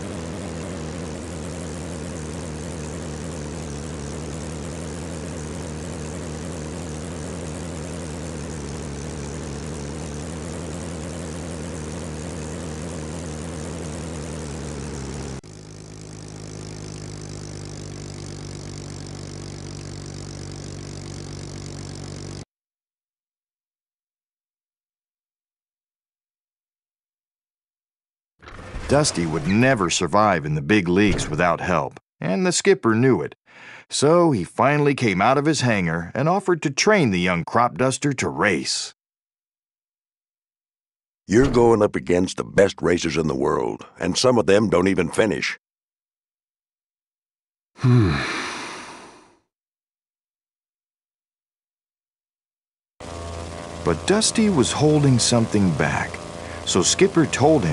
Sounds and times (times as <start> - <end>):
Sigh: 33.5 - 33.9, 47.8 - 49.5.